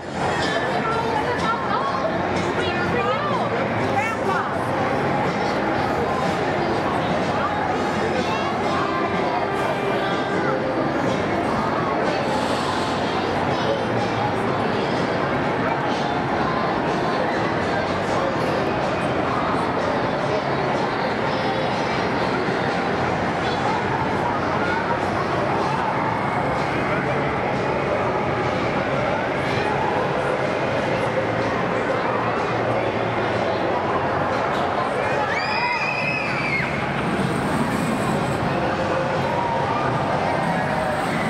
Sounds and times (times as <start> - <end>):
Speech: 0.0 - 41.2.